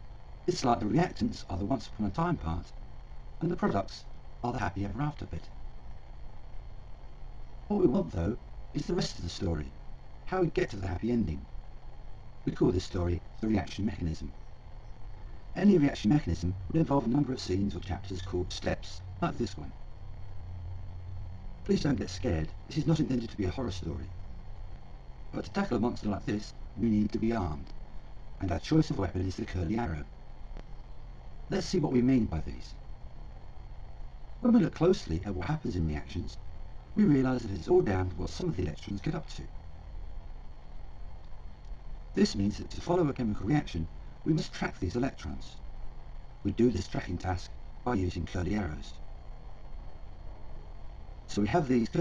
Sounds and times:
Speech: 0:00.5 - 0:02.7, 0:03.4 - 0:05.5, 0:07.7 - 0:11.5, 0:12.5 - 0:14.3, 0:15.6 - 0:19.7, 0:21.7 - 0:24.2, 0:25.3 - 0:27.7, 0:28.4 - 0:30.1, 0:31.5 - 0:32.8, 0:34.4 - 0:36.4, 0:37.0 - 0:39.5, 0:42.2 - 0:45.6, 0:46.4 - 0:49.0, 0:51.3 - 0:52.0.

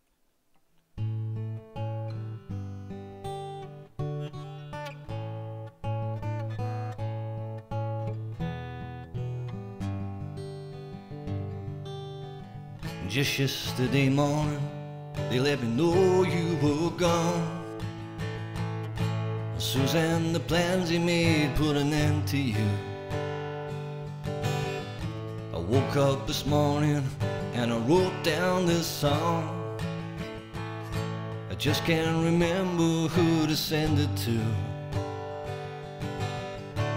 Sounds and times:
Acoustic guitar: 0:00.0 - 0:36.9.

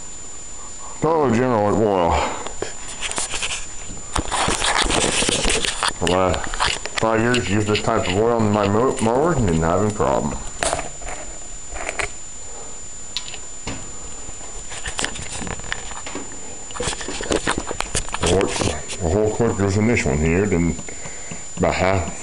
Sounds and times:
Speech: 0:01.0 - 0:02.4, 0:06.0 - 0:10.5, 0:18.2 - 0:20.8, 0:21.6 - 0:22.2.

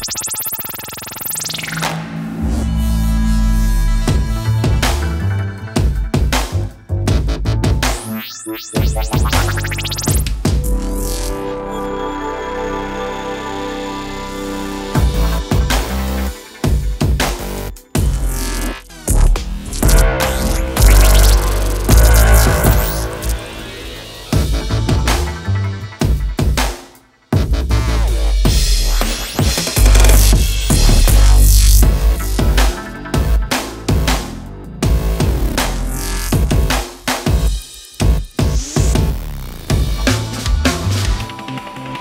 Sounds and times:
Drum machine: 0:05.8 - 0:11.3, 0:15.0 - 0:42.0.

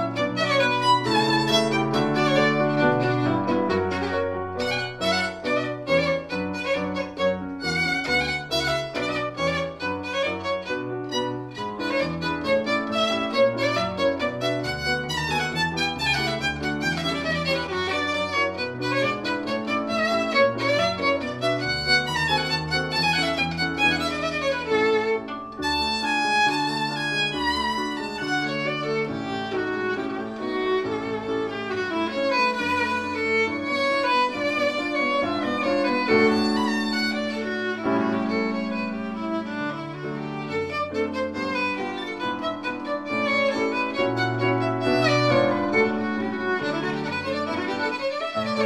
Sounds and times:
Violin, fiddle: 0:00.0 - 0:48.6.

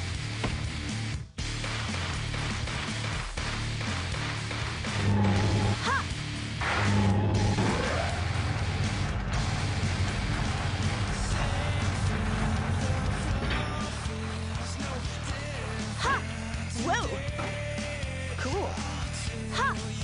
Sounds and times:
Music: 0:00.0 - 0:20.0.

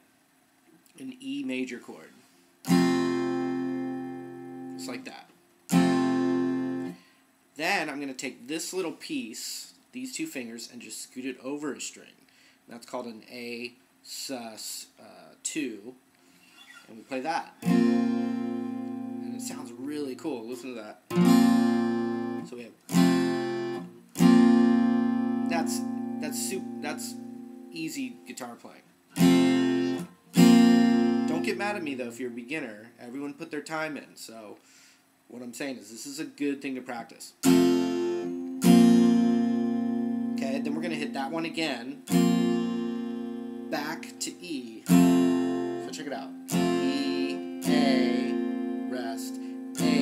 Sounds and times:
Speech: 0:00.9 - 0:02.2, 0:04.8 - 0:05.3, 0:07.6 - 0:16.0, 0:16.9 - 0:17.6, 0:19.2 - 0:21.0, 0:22.4 - 0:22.8, 0:25.5 - 0:27.2, 0:27.8 - 0:28.9, 0:31.3 - 0:34.6, 0:35.3 - 0:37.4, 0:40.4 - 0:42.0, 0:43.7 - 0:44.9, 0:45.8 - 0:48.3, 0:48.9 - 0:50.0
Acoustic guitar: 0:02.2 - 0:07.2, 0:16.2 - 0:32.6, 0:37.4 - 0:50.0.

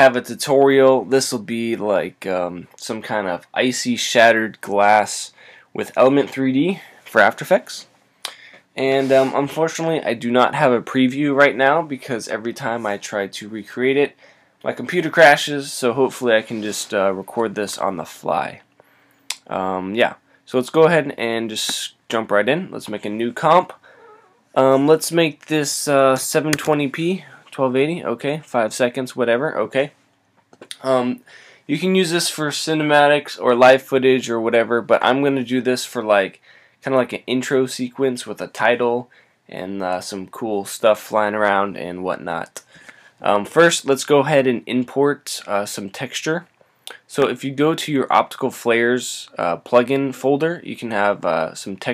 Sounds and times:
Speech: 0:00.0 - 0:18.7, 0:19.3 - 0:23.9, 0:24.6 - 0:30.0, 0:30.7 - 0:51.9.

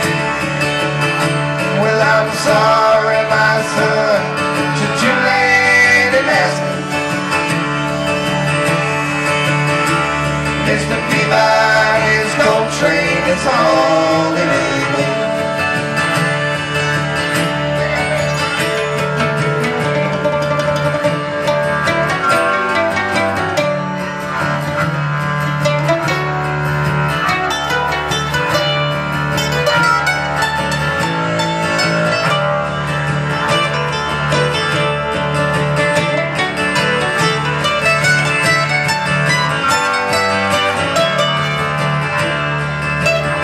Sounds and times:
Acoustic guitar: 0:00.0 - 0:43.4
Bass guitar: 0:00.0 - 0:43.4.

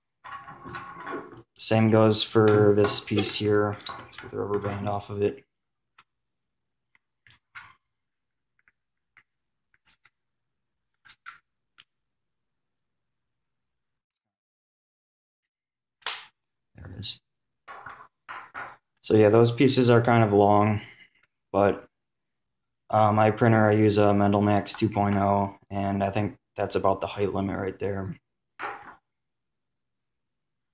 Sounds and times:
Speech: 0:01.6 - 0:05.4, 0:16.8 - 0:17.2, 0:19.0 - 0:21.0, 0:21.6 - 0:21.9, 0:22.9 - 0:28.2.

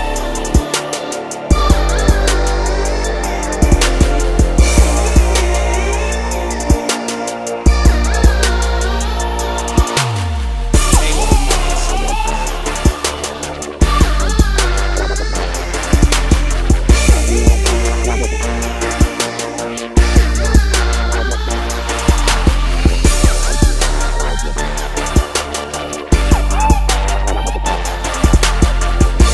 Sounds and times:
Dubstep: 0:00.0 - 0:29.3.

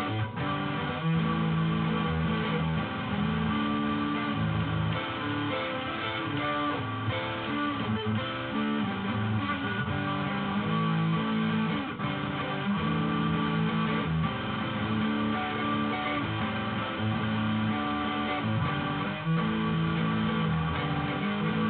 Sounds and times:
Music: 0:00.0 - 0:21.6.

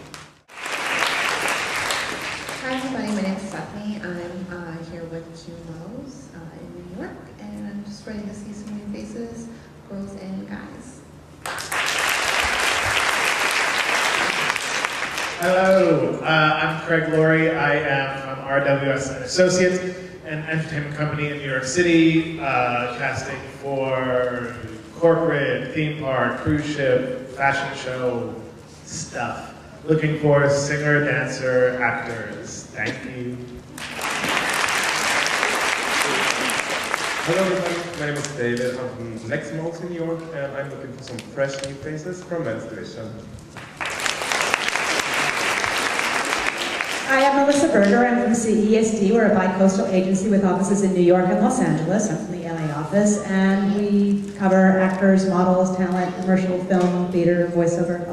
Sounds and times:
Applause: 0:00.0 - 0:03.3, 0:11.4 - 0:16.1, 0:33.7 - 0:38.4, 0:43.5 - 0:48.0
Speech: 0:02.6 - 0:11.0, 0:15.4 - 0:33.4, 0:37.3 - 0:43.3, 0:47.1 - 0:58.1.

